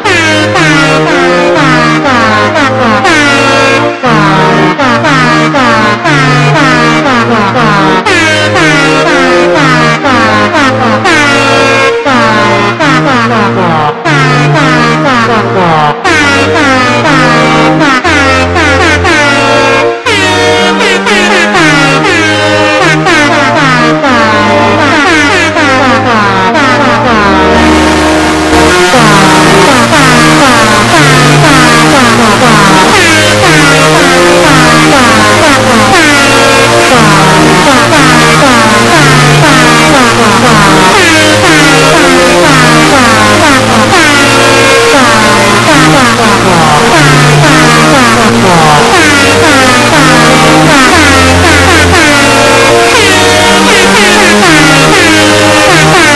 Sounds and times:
Air horn, truck horn: 0.0 - 56.1
Music: 0.0 - 56.1.

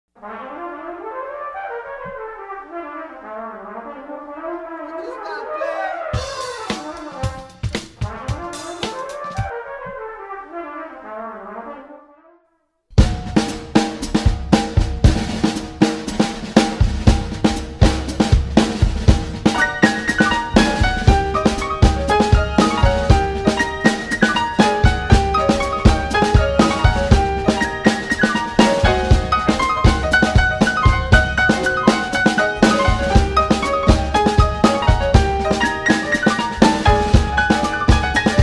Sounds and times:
French horn: 0.2 - 12.6
Speech: 4.8 - 7.2.

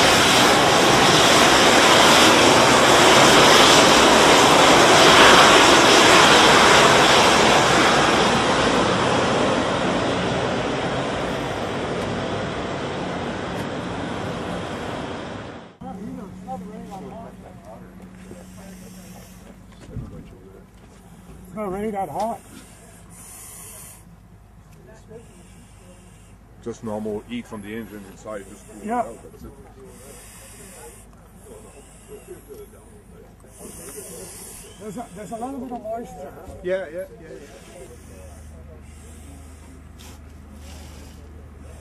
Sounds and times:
Fire: 0.0 - 41.8
Speech: 15.8 - 40.0.

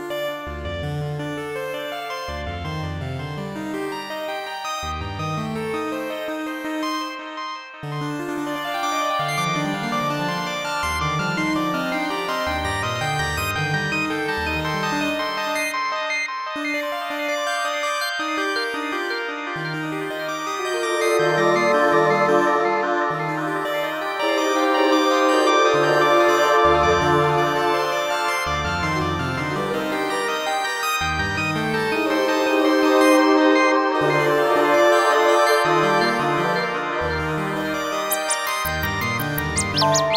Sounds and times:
Christmas music: 19.8 - 40.1.

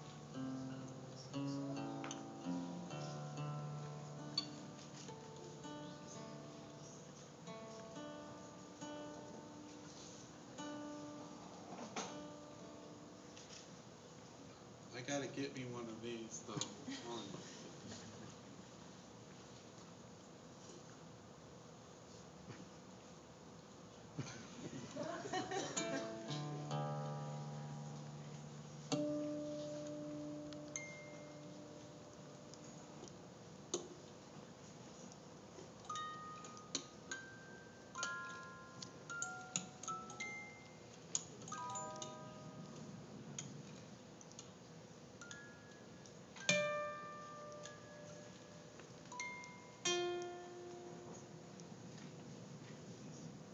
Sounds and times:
Acoustic guitar: 0.0 - 13.9, 24.1 - 44.0, 45.2 - 52.2
Strum: 25.8 - 33.1.

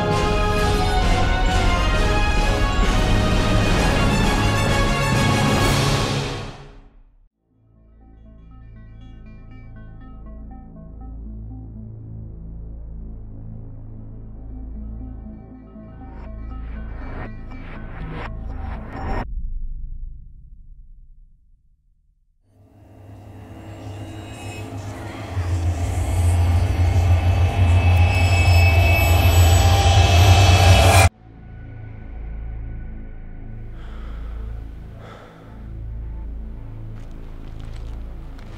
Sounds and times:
Music: 0.0 - 19.5, 22.5 - 38.5.

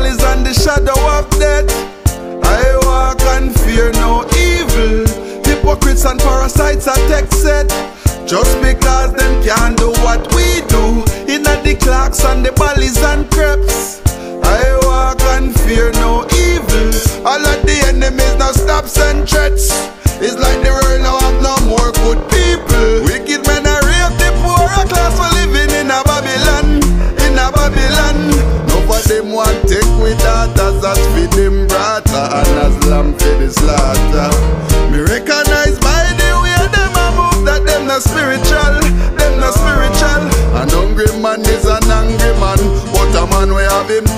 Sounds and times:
Music: 0.0 - 44.1.

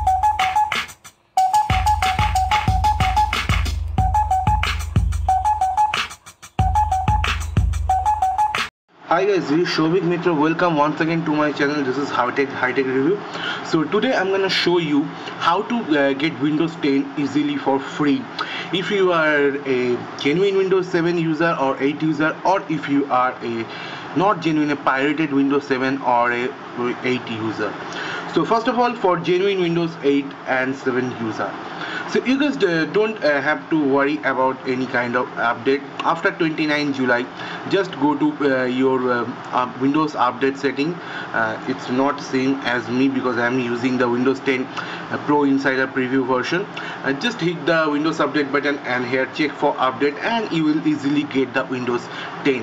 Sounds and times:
Music: 0.0 - 8.7
Speech: 9.1 - 52.6.

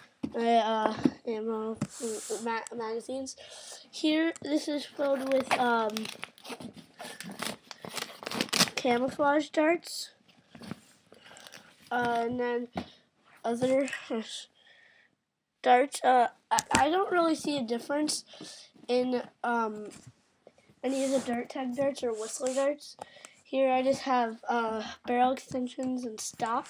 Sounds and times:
Child speech, kid speaking: 0.3 - 6.2, 8.8 - 10.2, 11.9 - 12.8, 13.5 - 14.5, 15.6 - 20.0, 20.9 - 26.7.

